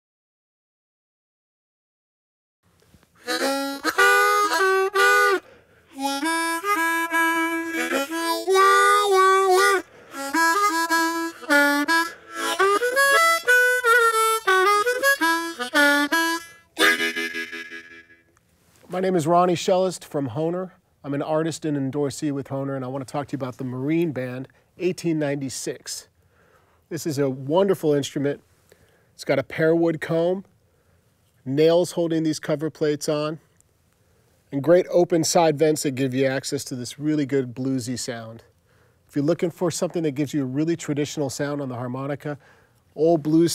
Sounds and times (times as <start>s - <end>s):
Speech: 18.9s - 26.1s, 26.9s - 28.4s, 29.2s - 30.5s, 31.4s - 33.4s, 34.5s - 38.5s, 39.1s - 42.4s, 43.0s - 43.5s.